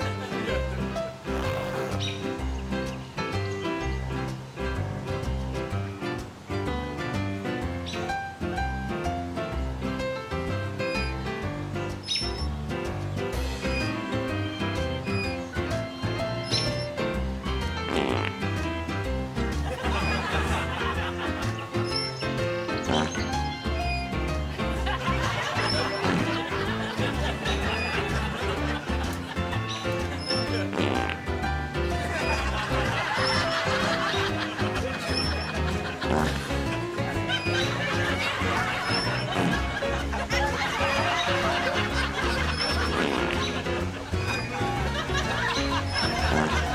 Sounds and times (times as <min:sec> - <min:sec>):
Music: 0:00.0 - 0:46.7
Fart: 0:01.2 - 0:02.2, 0:16.4 - 0:16.9, 0:17.8 - 0:18.6, 0:20.0 - 0:20.6, 0:21.8 - 0:24.2, 0:25.6 - 0:26.6, 0:30.0 - 0:31.3, 0:33.2 - 0:33.5, 0:35.1 - 0:36.7, 0:37.4 - 0:39.8, 0:42.2 - 0:43.6, 0:45.9 - 0:46.7
Laughter: 0:19.6 - 0:21.9, 0:24.5 - 0:30.8, 0:32.0 - 0:46.7.